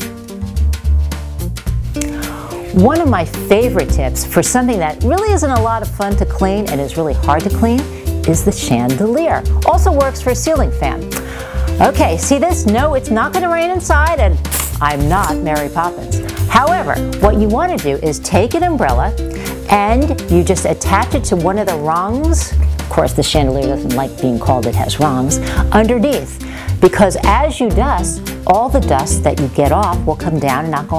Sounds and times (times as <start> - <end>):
Music: 0.0 - 30.9
Speech: 2.8 - 11.0, 11.8 - 19.1, 19.7 - 30.9.